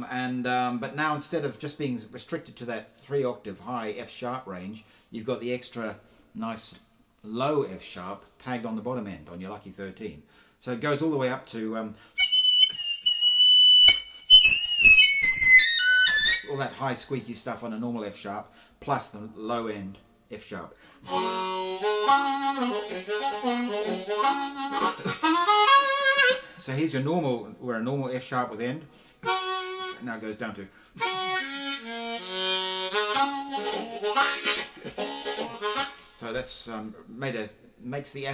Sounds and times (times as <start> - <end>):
Whistle: 12.2 - 16.8.